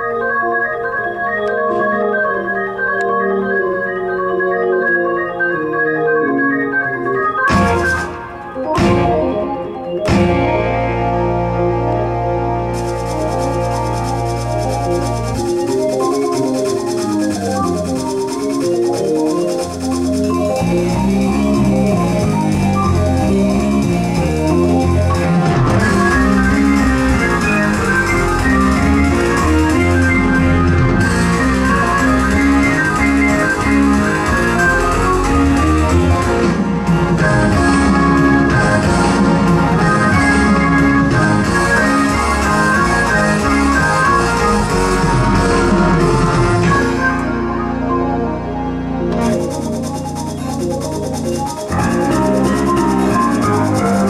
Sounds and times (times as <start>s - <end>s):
Electric piano: 0.0s - 54.1s.